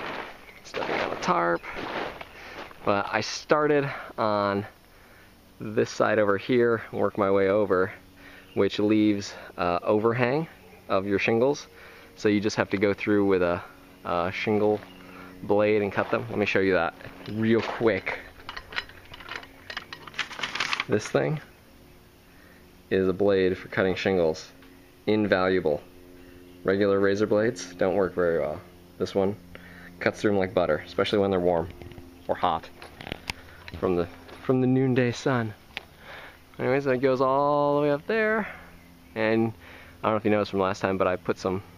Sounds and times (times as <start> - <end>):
Outside, rural or natural: 0.0 - 41.7
Speech: 0.7 - 1.8, 2.9 - 4.8, 5.6 - 8.0, 8.6 - 14.8, 15.4 - 18.3, 20.9 - 21.5, 22.9 - 25.8, 26.6 - 29.4, 30.0 - 31.7, 32.3 - 32.7, 33.8 - 35.6, 36.6 - 38.6, 39.2 - 41.7.